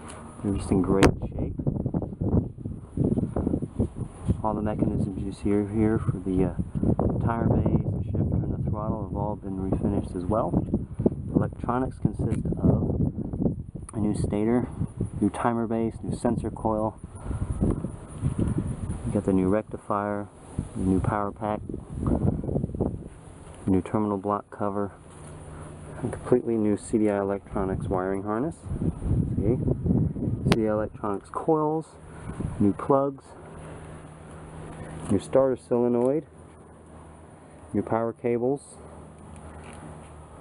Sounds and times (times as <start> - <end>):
Speech: 0.4 - 1.6, 4.4 - 10.6, 11.3 - 12.9, 13.9 - 17.0, 19.1 - 21.7, 23.6 - 25.0, 26.0 - 28.7, 29.3 - 29.7, 30.4 - 32.0, 32.6 - 33.4, 35.1 - 36.3, 37.7 - 38.8.